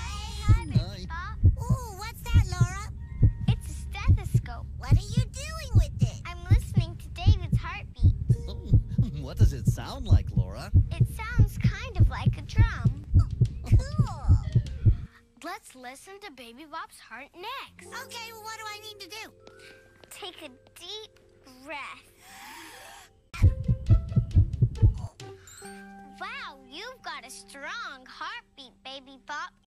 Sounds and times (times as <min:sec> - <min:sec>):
Heart sounds, heartbeat: 0:00.4 - 0:15.1, 0:23.4 - 0:25.1.